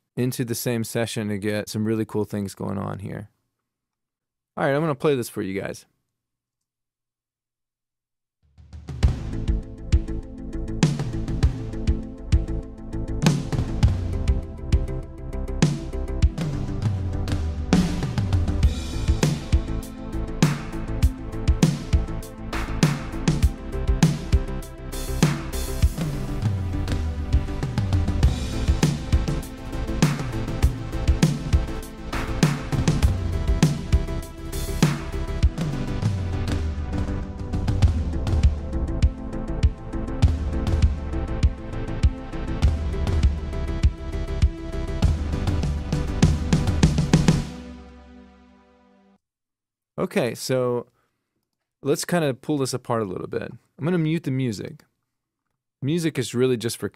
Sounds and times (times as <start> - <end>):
Speech: 0.2 - 3.3, 4.6 - 5.9, 50.0 - 50.9, 51.8 - 54.9, 55.8 - 56.9
Music: 8.4 - 49.2.